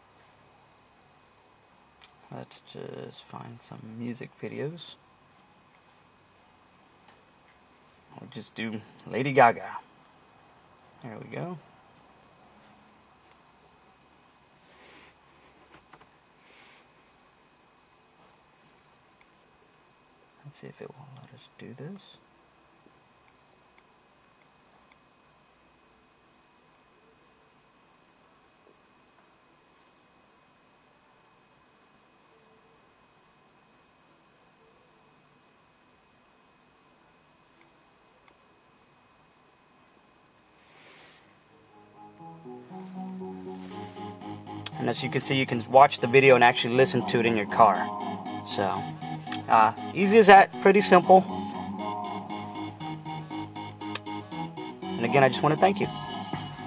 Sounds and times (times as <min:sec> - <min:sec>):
Speech: 0:02.3 - 0:05.0, 0:08.1 - 0:09.9, 0:11.0 - 0:11.7, 0:20.4 - 0:22.3, 0:44.8 - 0:48.8, 0:49.5 - 0:51.4, 0:55.0 - 0:55.9
Music: 0:41.6 - 0:56.6.